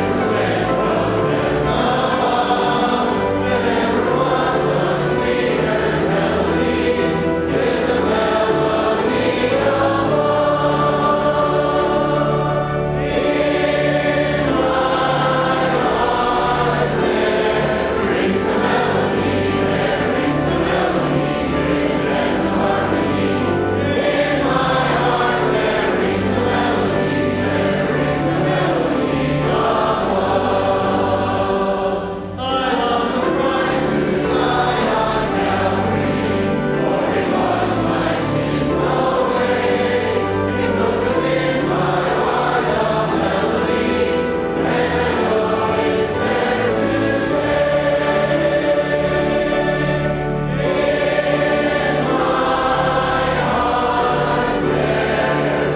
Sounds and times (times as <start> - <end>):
Choir: 0.0 - 55.7.